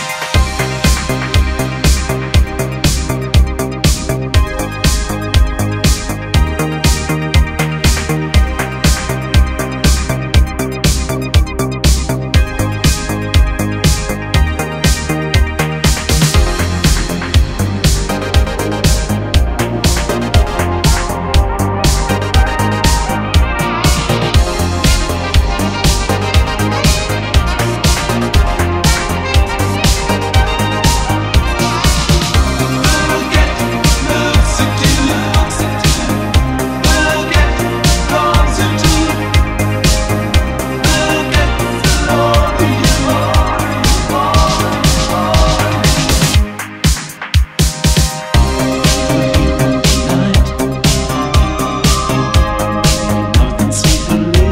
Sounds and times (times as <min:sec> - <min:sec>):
Music: 0:00.0 - 0:54.5.